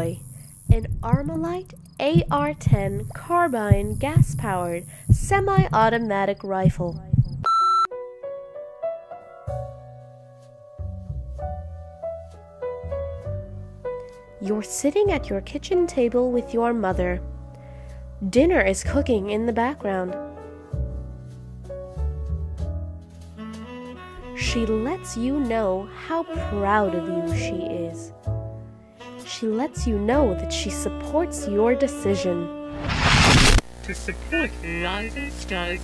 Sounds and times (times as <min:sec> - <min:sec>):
Speech: 0:00.0 - 0:07.1, 0:14.4 - 0:17.2, 0:18.2 - 0:20.2, 0:24.4 - 0:28.1, 0:29.3 - 0:32.5, 0:33.9 - 0:35.8.